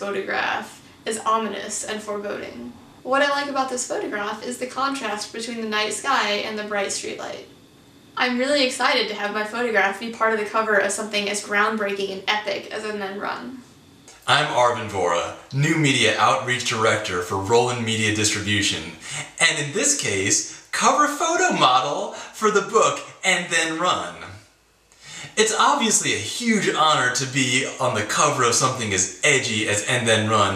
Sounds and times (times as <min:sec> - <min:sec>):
Speech: 0:00.0 - 0:07.4, 0:08.2 - 0:24.4, 0:25.1 - 0:30.5.